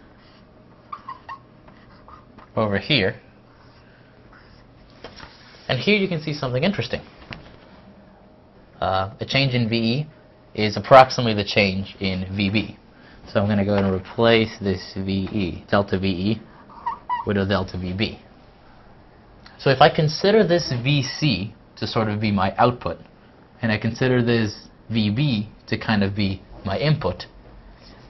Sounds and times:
Speech: 2.6 - 3.3, 5.7 - 7.1, 8.8 - 16.5, 17.3 - 18.3, 19.6 - 27.4.

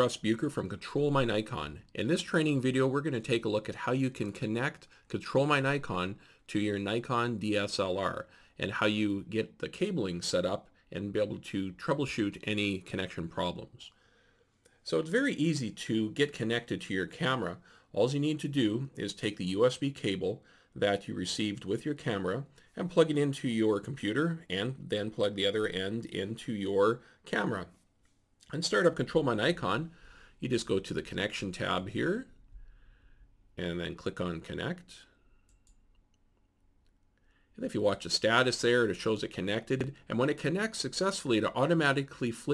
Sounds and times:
Speech: 0.0 - 14.0, 14.8 - 27.8, 28.4 - 32.4, 33.6 - 35.1, 37.6 - 42.5.

